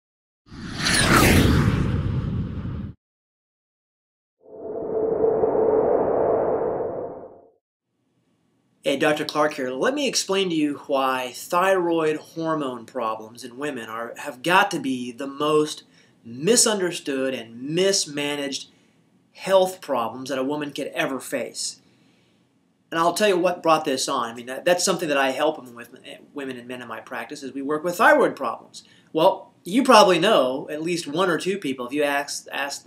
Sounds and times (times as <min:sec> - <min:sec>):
Inside, small room: 0:07.9 - 0:32.8
Speech: 0:08.8 - 0:18.7, 0:19.4 - 0:21.8, 0:22.9 - 0:32.8.